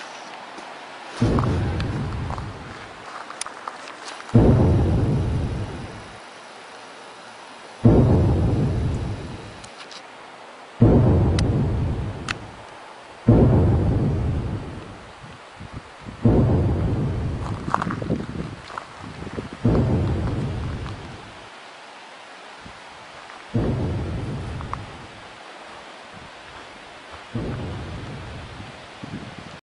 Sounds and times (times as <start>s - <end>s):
Crackle: 0.0s - 6.2s, 7.6s - 10.1s, 10.8s - 15.5s, 16.2s - 21.5s, 23.2s - 25.8s, 26.4s - 28.8s.